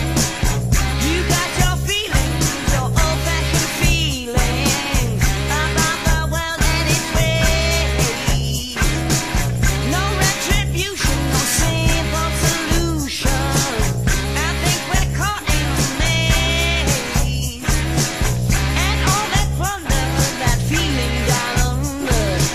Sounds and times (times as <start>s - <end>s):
Funk: 0.0s - 22.5s.